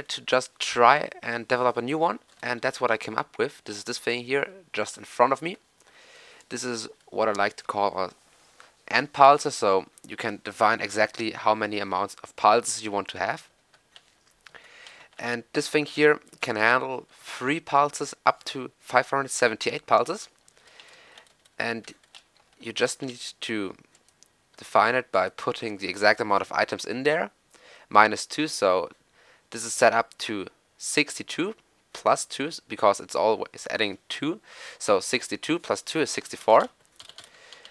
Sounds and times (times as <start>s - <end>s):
Speech: 0.0s - 5.6s, 6.5s - 8.2s, 8.9s - 13.5s, 15.2s - 20.3s, 21.6s - 22.0s, 22.6s - 23.8s, 24.6s - 36.8s.